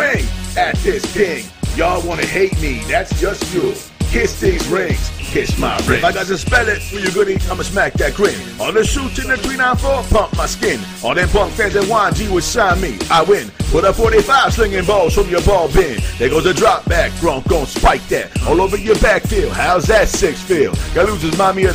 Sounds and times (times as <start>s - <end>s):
Music: 0.0s - 21.7s
Rapping: 0.0s - 21.7s.